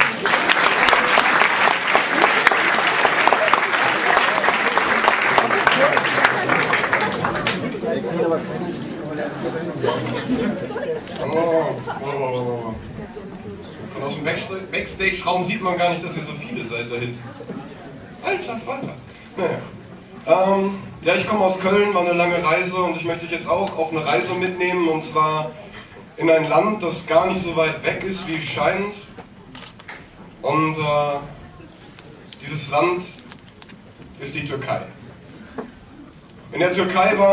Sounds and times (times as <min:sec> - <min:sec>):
Speech: 0:07.6 - 0:25.6, 0:26.2 - 0:29.2, 0:36.5 - 0:37.3.